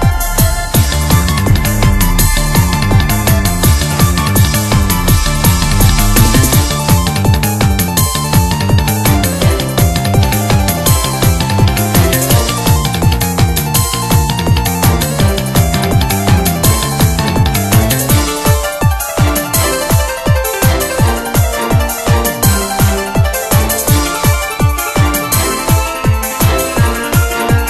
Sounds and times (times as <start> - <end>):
Music: 0.0 - 27.7.